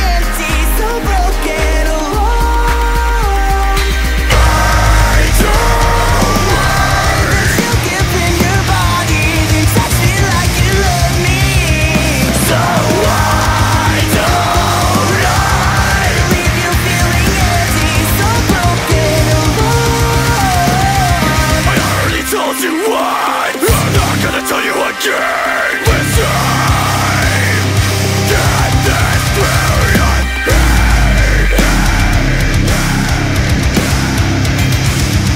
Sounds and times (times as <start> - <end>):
Music: 0.0 - 35.3.